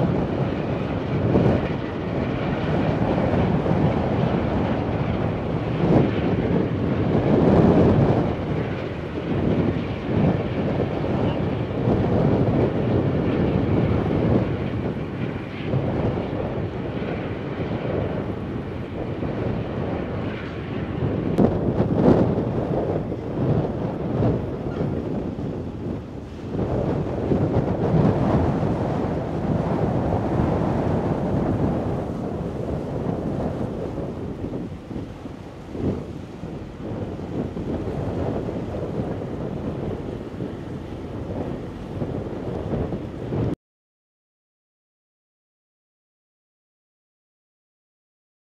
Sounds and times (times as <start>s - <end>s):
Ship: 0.0s - 43.6s
Wind noise (microphone): 0.0s - 43.6s.